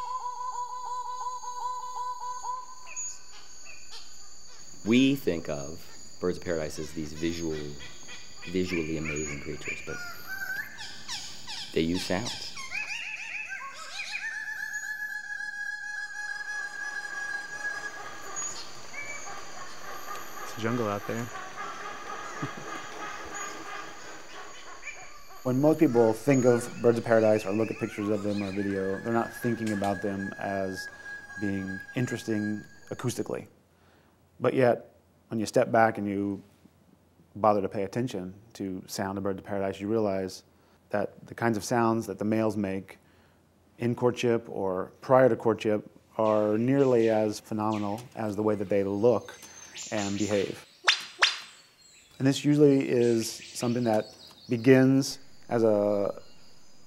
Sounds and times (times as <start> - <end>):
Speech: 4.8 - 7.9, 8.5 - 10.0, 11.8 - 12.5, 20.5 - 21.3, 25.5 - 33.5, 34.4 - 36.4, 37.4 - 43.0, 43.8 - 50.6, 52.2 - 56.2.